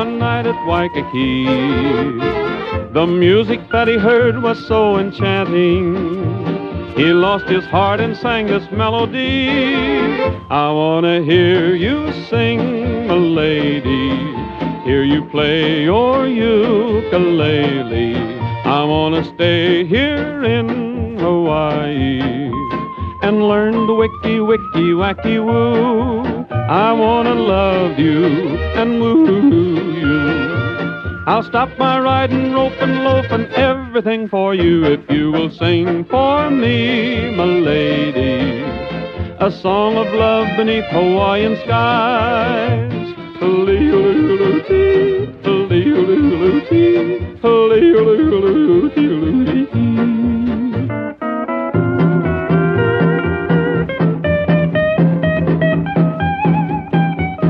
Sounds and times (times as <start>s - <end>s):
Music: 0.0s - 57.4s.